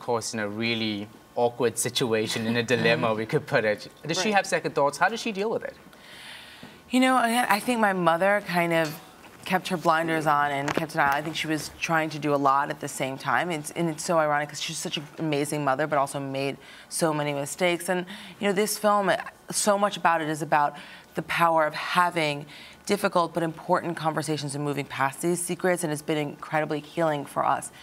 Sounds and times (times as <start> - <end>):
Female speech, woman speaking: 4.1 - 5.4, 6.9 - 27.8.